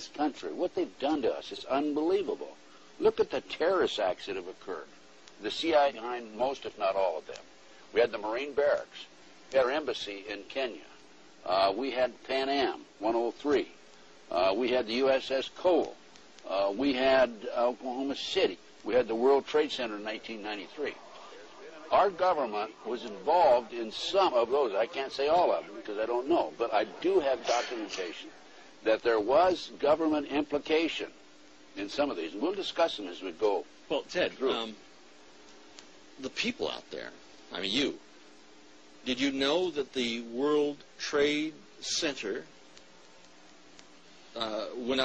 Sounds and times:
Speech: 0:00.0 - 0:07.4, 0:08.0 - 0:31.2, 0:31.8 - 0:34.8, 0:36.2 - 0:38.0, 0:39.0 - 0:42.5, 0:44.4 - 0:45.0.

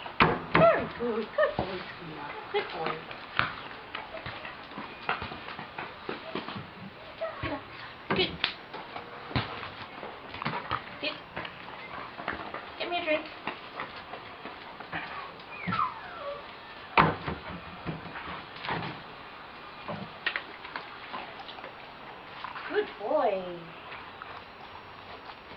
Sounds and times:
Whimper (dog): 0:15.0 - 0:16.9.

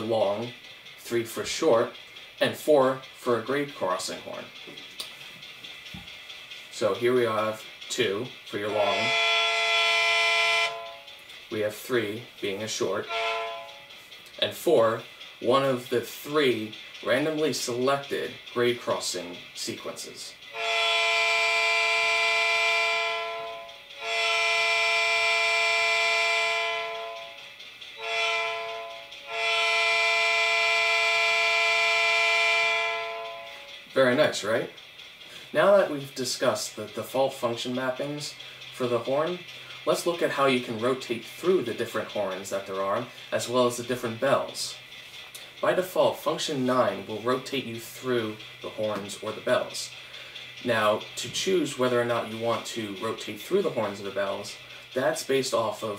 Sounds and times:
Speech: 0:00.0 - 0:04.6, 0:06.7 - 0:09.2, 0:11.5 - 0:13.1, 0:14.4 - 0:20.4, 0:34.0 - 0:34.8, 0:35.5 - 0:44.8, 0:45.6 - 0:50.0, 0:50.6 - 0:55.9.

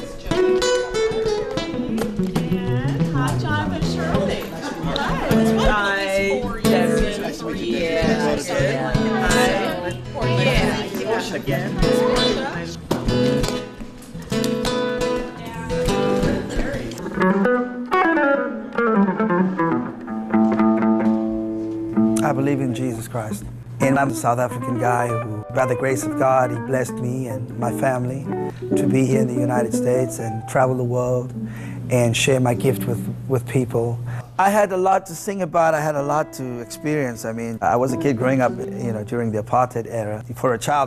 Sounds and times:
Music: 0:00.0 - 0:34.3, 0:35.6 - 0:40.8
Speech: 0:22.2 - 0:31.3, 0:31.9 - 0:40.8.

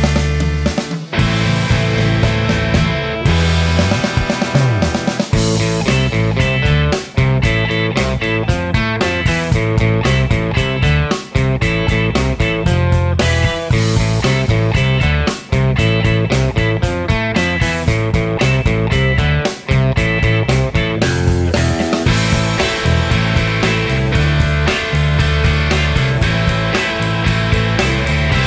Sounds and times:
Electric guitar: 0:00.0 - 0:28.4
Strum: 0:00.0 - 0:28.4.

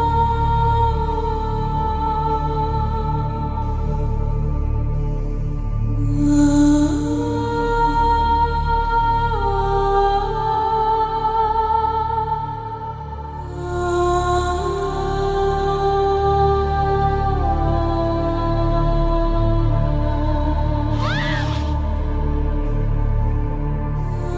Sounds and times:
Music: 0:00.0 - 0:24.3.

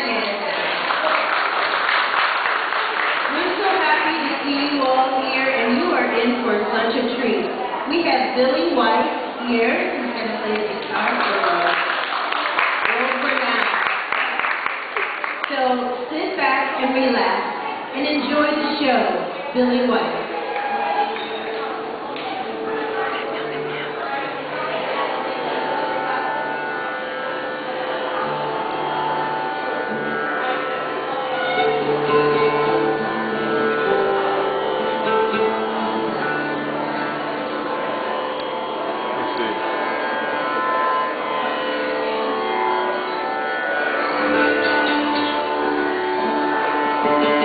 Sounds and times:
Musical instrument: 0:20.5 - 0:47.4.

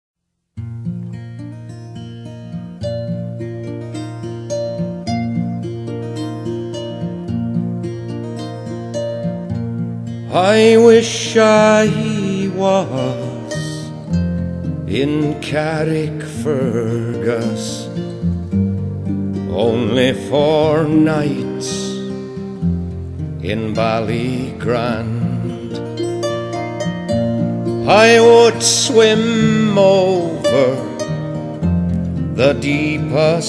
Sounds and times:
Harp: 0:01.1 - 0:15.0, 0:16.3 - 0:33.4.

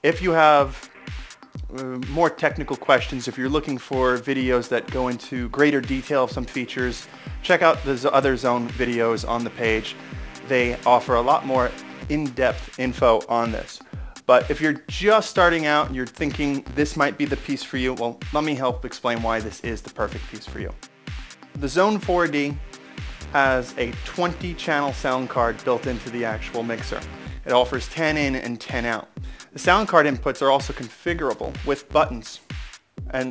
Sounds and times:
Speech: 0:00.0 - 0:00.8, 0:01.7 - 0:20.8, 0:21.6 - 0:22.6, 0:23.3 - 0:32.4
Music: 0:00.0 - 0:33.3.

